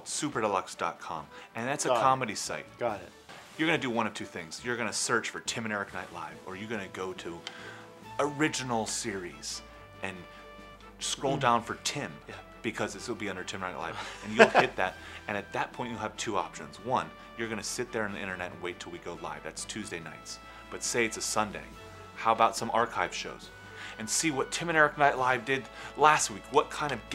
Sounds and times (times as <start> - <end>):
Speech: 0.0 - 7.4, 8.2 - 10.3, 11.0 - 27.1
Music: 0.0 - 27.1.